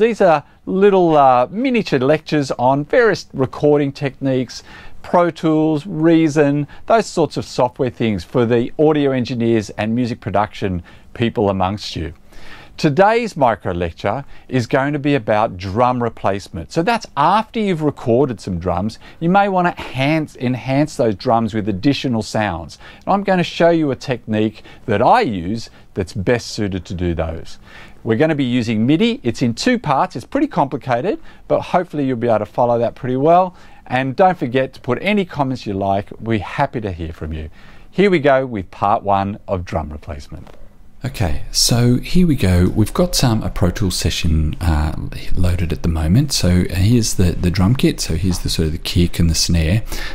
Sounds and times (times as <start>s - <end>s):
Speech: 0.0s - 12.2s, 12.8s - 50.1s.